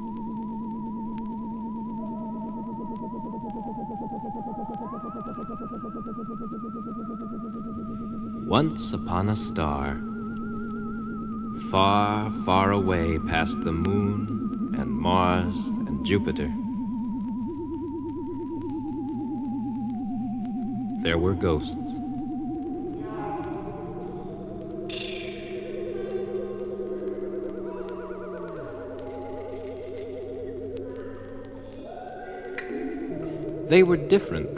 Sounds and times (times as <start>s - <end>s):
Speech: 8.5s - 10.0s, 11.6s - 16.6s, 21.0s - 22.0s, 23.0s - 24.3s, 33.7s - 34.5s.